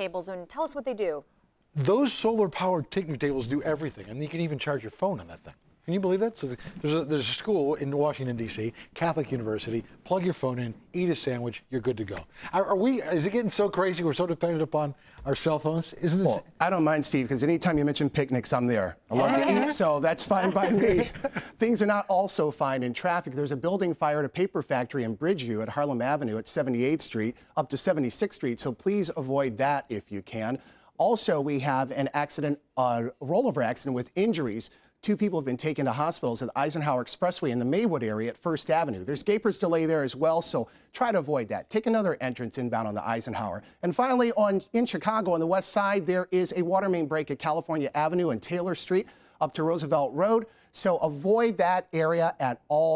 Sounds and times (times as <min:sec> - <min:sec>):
Speech: 0:01.8 - 0:52.9.